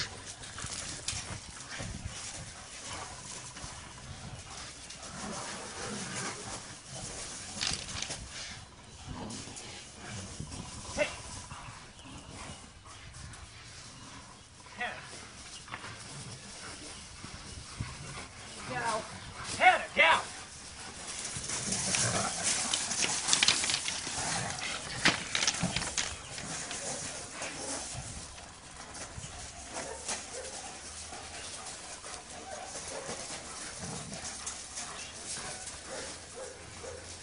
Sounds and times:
Speech: 14.8 - 15.1, 18.6 - 20.4.

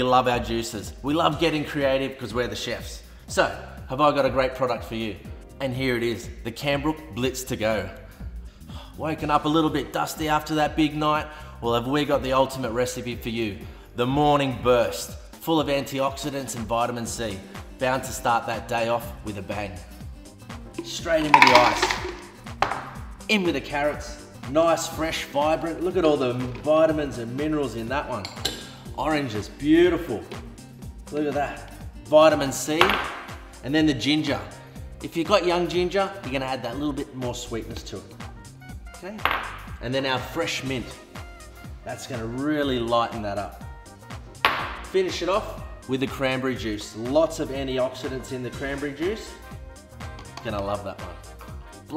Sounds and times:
Speech: 0.0 - 8.0, 9.0 - 19.9, 20.8 - 22.0, 23.3 - 28.3, 29.0 - 30.3, 31.1 - 32.9, 33.6 - 38.1, 39.8 - 41.0, 41.8 - 43.6, 44.9 - 49.4, 50.4 - 51.2
Music: 0.0 - 51.9.

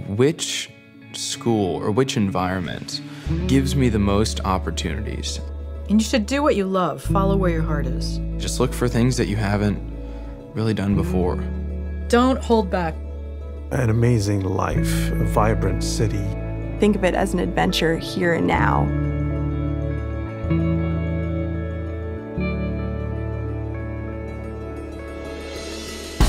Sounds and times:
Speech: 0.0 - 9.8, 10.6 - 11.5, 13.7 - 18.9
Music: 0.0 - 26.2.

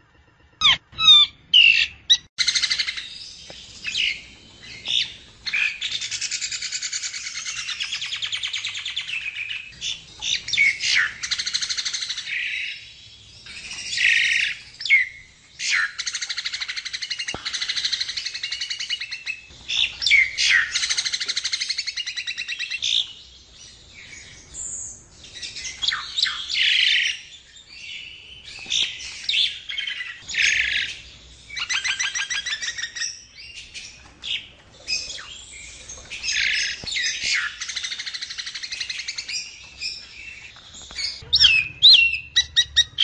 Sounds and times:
Chirp, tweet: 0.0 - 43.0.

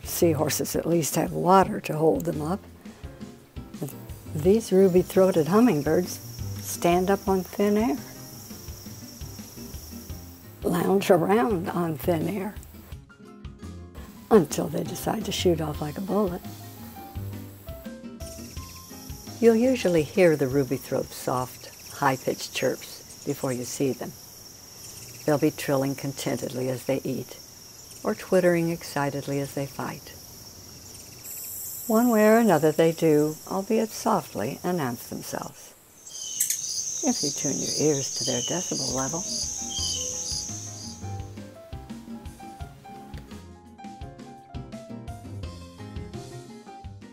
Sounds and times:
Speech: 0.0 - 2.6, 3.8 - 8.0, 10.6 - 12.6, 14.3 - 16.4, 19.4 - 24.1, 25.3 - 27.4, 28.1 - 30.2, 31.9 - 35.7, 37.0 - 39.3
Outside, rural or natural: 0.0 - 47.1.

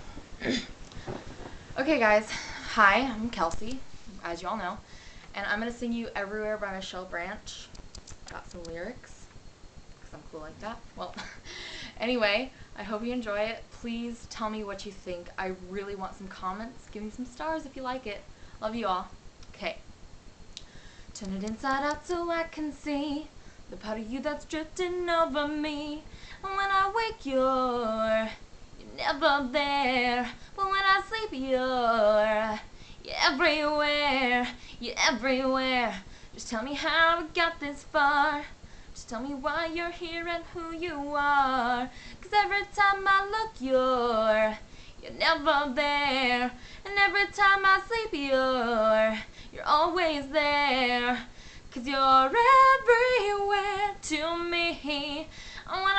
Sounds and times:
Female singing: 12.0 - 19.8, 21.2 - 55.9.

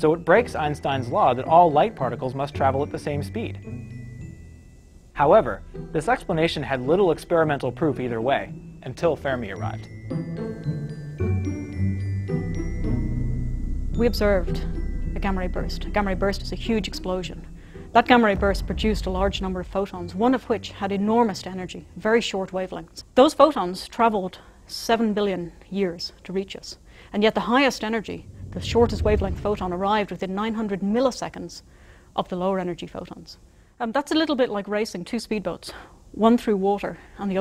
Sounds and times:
Speech: 0.0 - 3.6, 5.2 - 9.9, 14.0 - 37.4
Music: 0.0 - 23.0, 27.8 - 30.2.

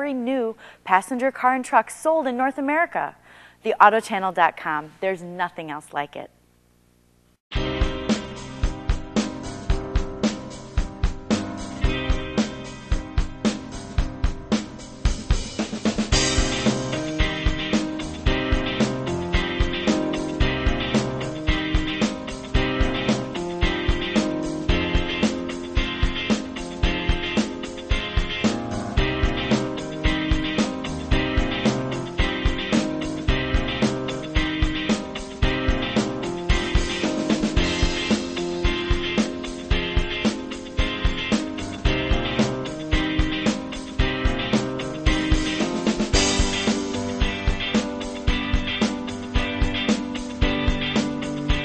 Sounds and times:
Music: 7.5 - 51.6.

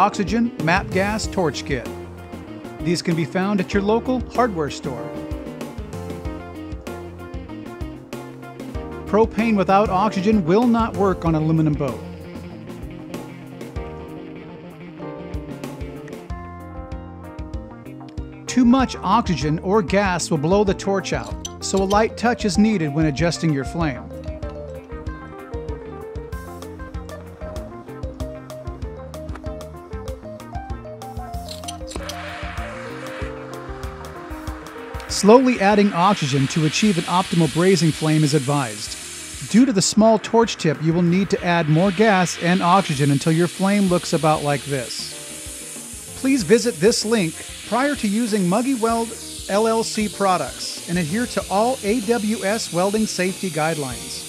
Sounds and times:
Speech: 0.0 - 2.0, 2.8 - 5.1, 9.1 - 12.0, 18.5 - 24.1, 35.1 - 45.1, 46.2 - 54.2
Music: 0.0 - 54.2.

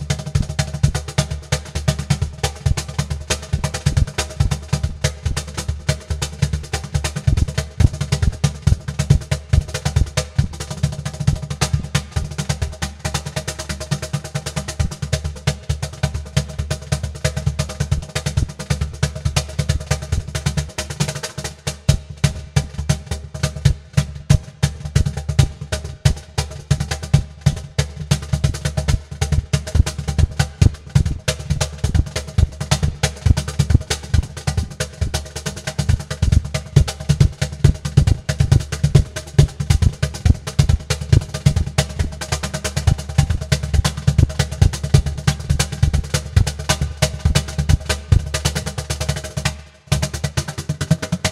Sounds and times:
Snare drum: 0.0 - 51.3.

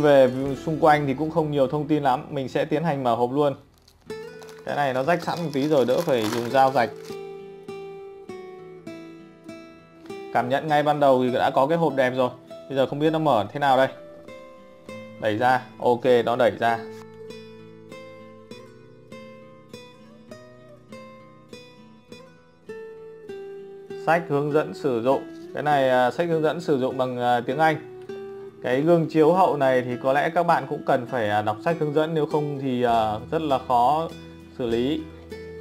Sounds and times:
Speech: 0.0 - 3.6, 4.7 - 7.0, 10.4 - 14.0, 15.2 - 16.9, 24.0 - 27.8, 28.6 - 35.1
Music: 0.0 - 35.6.

